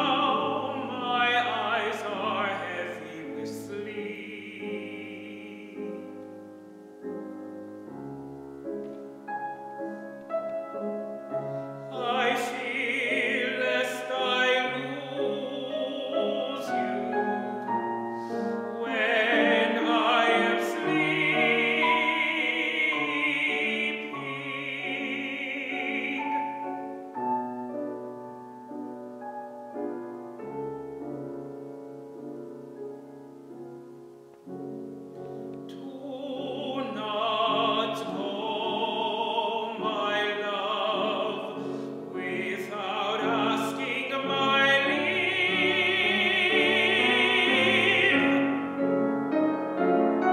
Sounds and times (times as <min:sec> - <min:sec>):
Male singing: 0:00.0 - 0:06.1, 0:11.9 - 0:17.8, 0:18.7 - 0:26.8, 0:35.7 - 0:48.6
Music: 0:00.0 - 0:50.3.